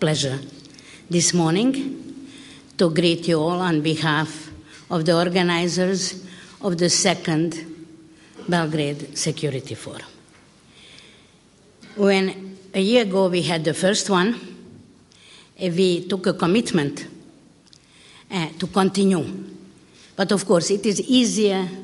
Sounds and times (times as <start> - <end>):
Female speech, woman speaking: 0.0 - 2.0, 2.8 - 7.8, 8.5 - 10.2, 11.9 - 14.5, 15.6 - 17.2, 18.3 - 19.5, 20.2 - 21.8.